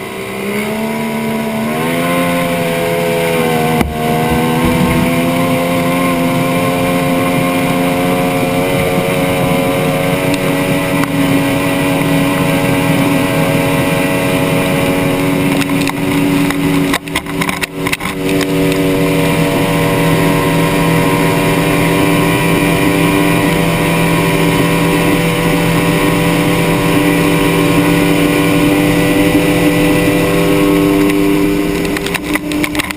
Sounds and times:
Motorboat, speedboat: 0:00.0 - 0:32.9.

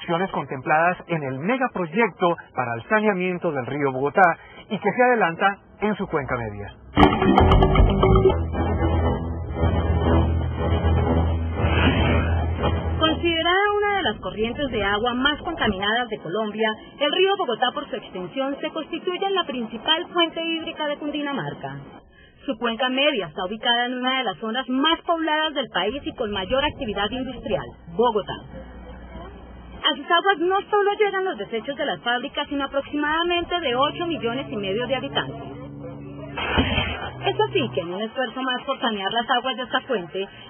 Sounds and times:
Speech: 0:13.0 - 0:21.8, 0:22.5 - 0:35.6, 0:37.2 - 0:40.3.

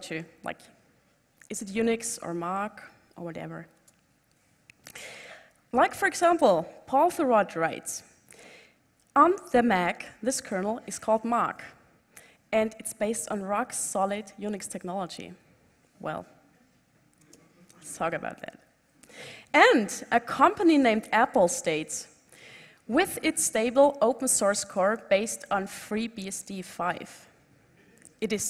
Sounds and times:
Speech: 0:01.5 - 0:03.7, 0:05.8 - 0:08.1, 0:09.2 - 0:11.8, 0:12.6 - 0:15.4, 0:17.4 - 0:18.6, 0:19.6 - 0:22.1, 0:22.9 - 0:27.2, 0:28.2 - 0:28.5.

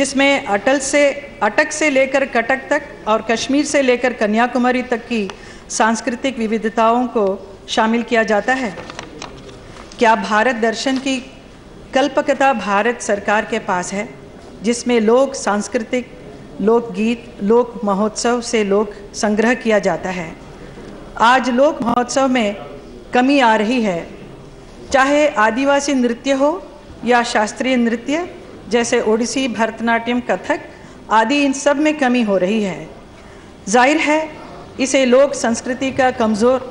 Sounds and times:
Female speech, woman speaking: 0:00.0 - 0:08.9, 0:10.0 - 0:20.4, 0:21.2 - 0:24.2, 0:24.9 - 0:32.9, 0:33.7 - 0:36.7
Narration, monologue: 0:00.0 - 0:36.7.

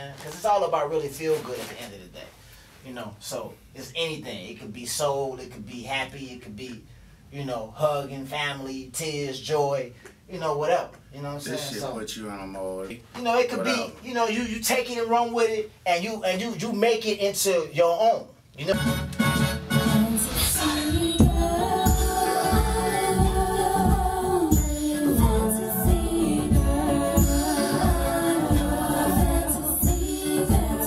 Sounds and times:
Speech: 0:00.0 - 0:18.8
Music: 0:18.7 - 0:30.8.

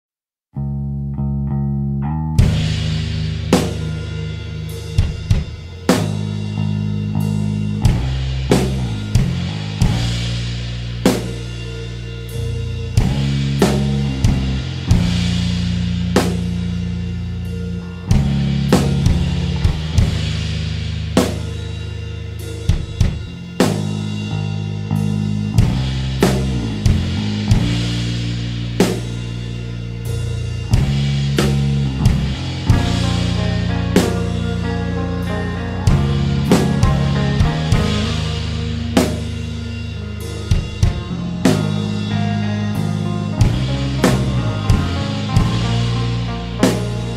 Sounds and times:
Bass drum: 0:02.2 - 0:47.1
Drum kit: 0:02.2 - 0:47.1.

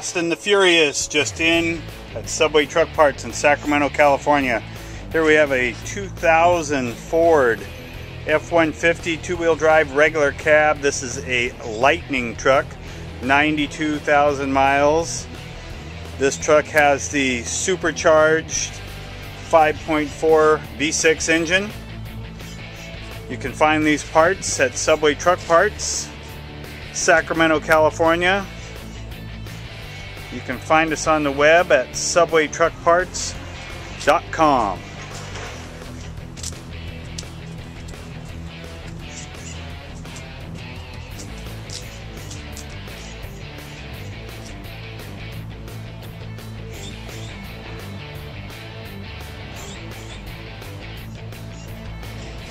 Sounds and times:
Speech: 0:00.0 - 0:07.7, 0:08.3 - 0:15.3, 0:16.2 - 0:18.8, 0:19.4 - 0:21.8, 0:23.3 - 0:26.2, 0:27.0 - 0:28.5, 0:30.3 - 0:33.4, 0:34.0 - 0:34.9
Music: 0:00.0 - 0:52.5.

